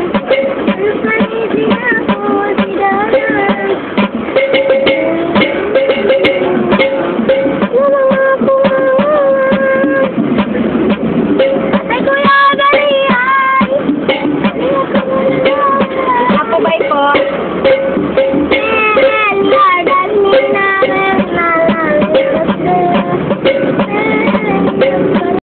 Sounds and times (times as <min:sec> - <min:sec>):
Child singing: 0:00.0 - 0:03.9, 0:04.6 - 0:10.2, 0:11.7 - 0:13.8, 0:14.4 - 0:17.2, 0:18.5 - 0:25.4
Music: 0:00.0 - 0:25.4
Female singing: 0:00.7 - 0:03.8, 0:04.8 - 0:10.1, 0:14.6 - 0:17.3, 0:18.6 - 0:25.4
Speech: 0:16.2 - 0:17.3.